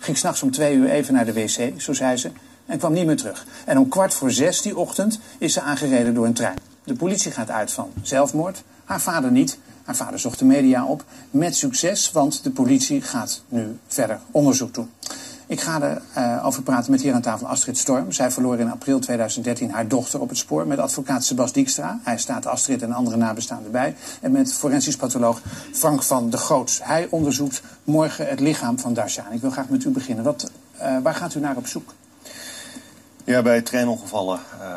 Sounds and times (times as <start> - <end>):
Speech: 0.0 - 14.9, 15.5 - 32.0, 33.3 - 34.7.